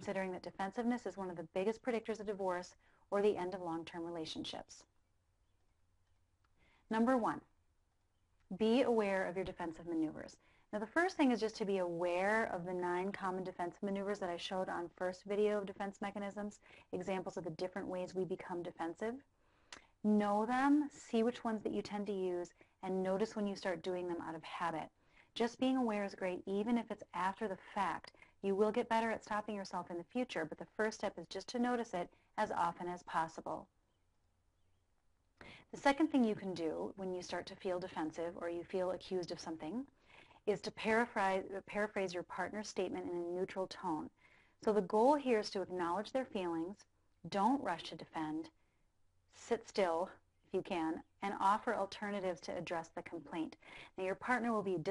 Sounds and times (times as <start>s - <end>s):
Speech: 0.0s - 4.9s, 6.9s - 7.5s, 8.5s - 19.3s, 20.0s - 33.7s, 35.6s - 39.9s, 40.5s - 48.6s, 49.4s - 54.9s.